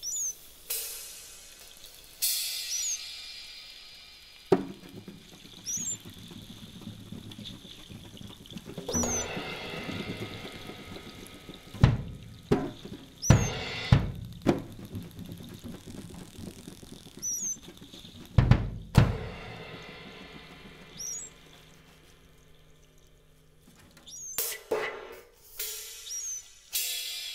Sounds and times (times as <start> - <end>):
Cymbal: 0.0 - 6.4, 8.9 - 15.1, 17.2 - 27.3
Drum: 2.2 - 22.6, 24.0 - 27.3.